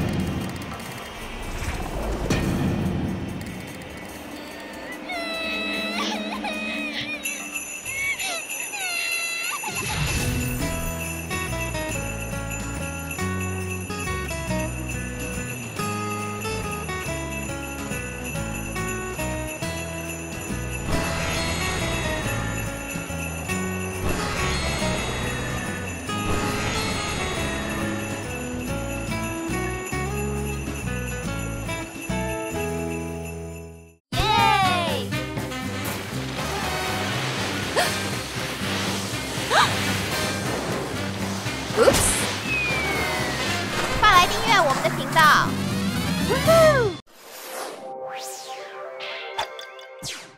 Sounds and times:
Outside, rural or natural: 0:00.0 - 0:50.3
Music: 0:02.3 - 0:08.8, 0:09.7 - 0:47.0, 0:47.8 - 0:50.3
Speech: 0:34.2 - 0:35.1, 0:44.0 - 0:45.5.

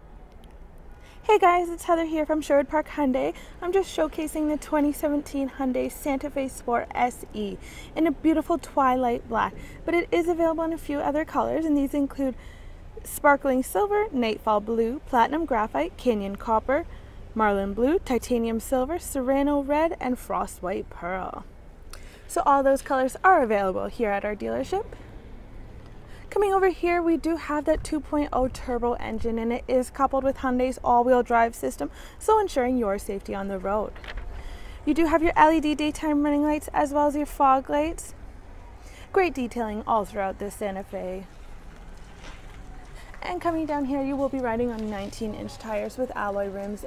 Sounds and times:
Speech: 0:01.3 - 0:12.4, 0:13.0 - 0:16.8, 0:17.4 - 0:21.4, 0:22.3 - 0:24.9, 0:26.3 - 0:33.9, 0:34.9 - 0:38.2, 0:39.1 - 0:41.3, 0:43.2 - 0:46.8.

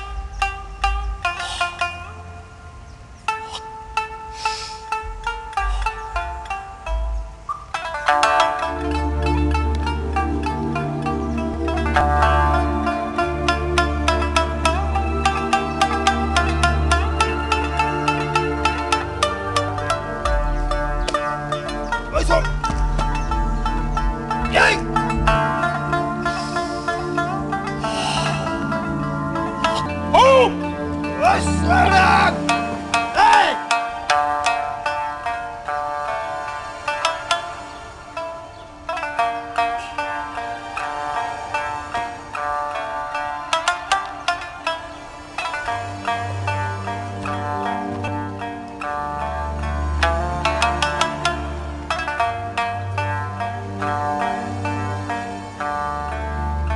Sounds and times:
Music: 0:00.0 - 0:56.7.

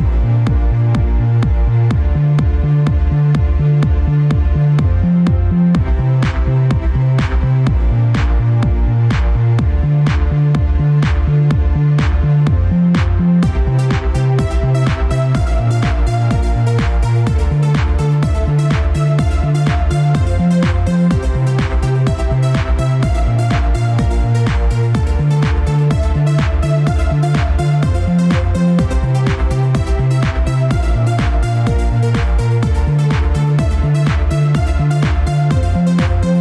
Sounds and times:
Music: 0:00.0 - 0:36.4.

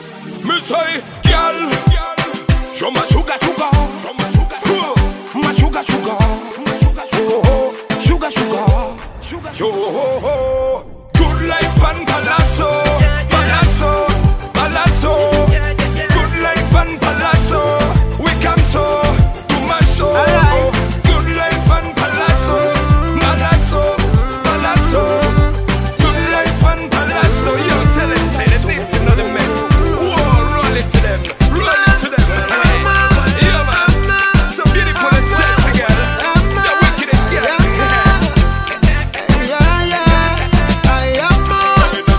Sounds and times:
Music: 0:00.0 - 0:42.1.

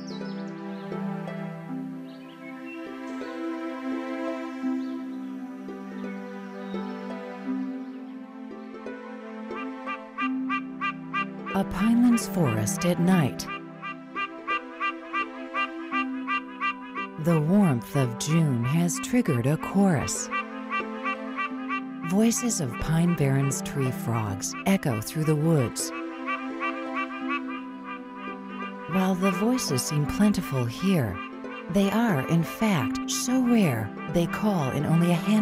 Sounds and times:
Frog: 0:13.4 - 0:17.4, 0:20.2 - 0:21.8, 0:22.4 - 0:30.0, 0:31.1 - 0:35.4.

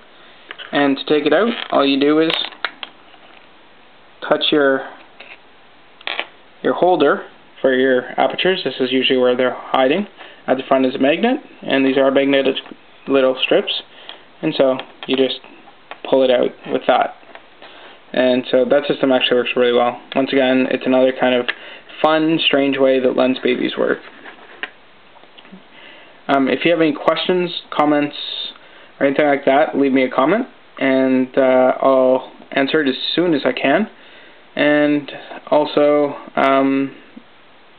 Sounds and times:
Inside, small room: 0:00.0 - 0:37.7
Speech: 0:00.7 - 0:02.6, 0:04.2 - 0:05.0, 0:06.6 - 0:17.2, 0:18.1 - 0:24.1, 0:26.3 - 0:34.0, 0:34.6 - 0:37.2.

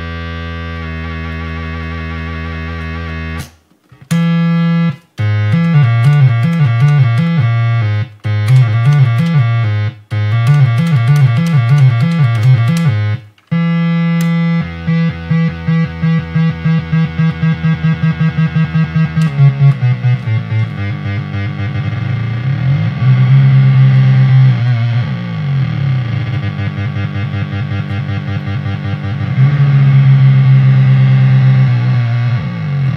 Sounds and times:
Bass guitar: 0:00.0 - 0:32.9.

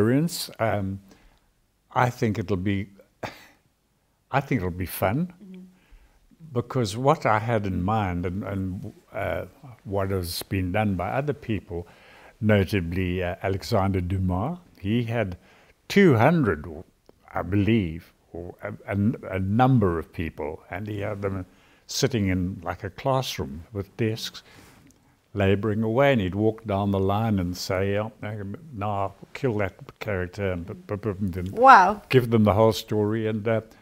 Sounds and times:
Speech: 0:00.0 - 0:01.0, 0:01.9 - 0:03.0, 0:04.3 - 0:05.7, 0:06.4 - 0:24.4, 0:25.4 - 0:33.7.

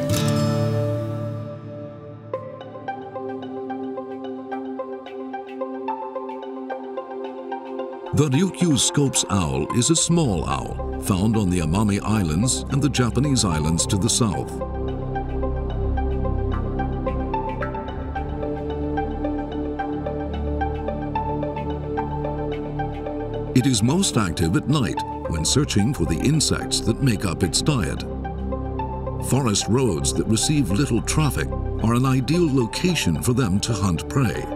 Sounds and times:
Music: 0:00.0 - 0:34.5
Speech: 0:08.2 - 0:14.6, 0:23.6 - 0:28.1, 0:29.2 - 0:34.5.

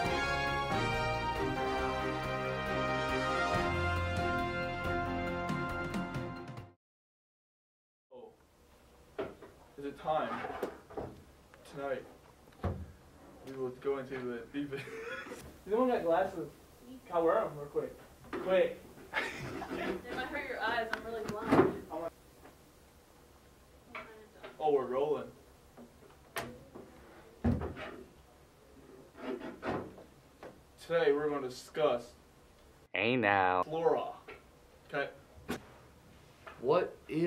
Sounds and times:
Speech: 0:33.0 - 0:34.2.

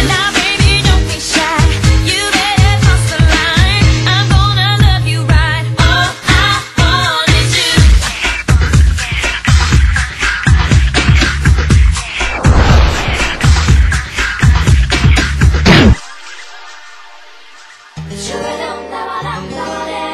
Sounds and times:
Music: 0:00.0 - 0:20.1.

